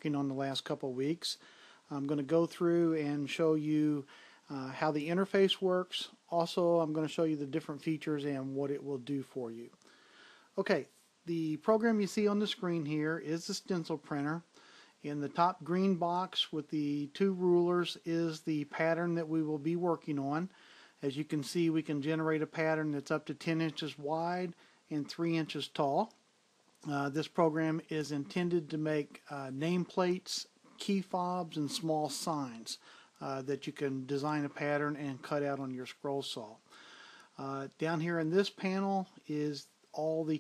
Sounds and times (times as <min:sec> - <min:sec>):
Speech: 0:00.0 - 0:09.8, 0:10.6 - 0:26.2, 0:26.8 - 0:36.6, 0:37.4 - 0:40.4.